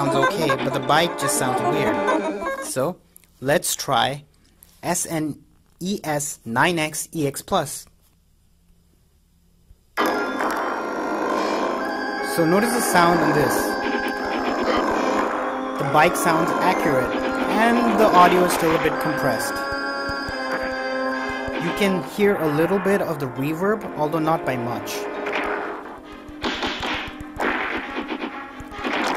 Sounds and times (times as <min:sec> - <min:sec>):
Music: 0:00.0 - 0:02.7, 0:11.6 - 0:29.1
Speech: 0:00.0 - 0:07.9, 0:12.3 - 0:13.8, 0:15.8 - 0:19.6, 0:21.6 - 0:25.0
Inside, small room: 0:00.0 - 0:29.1.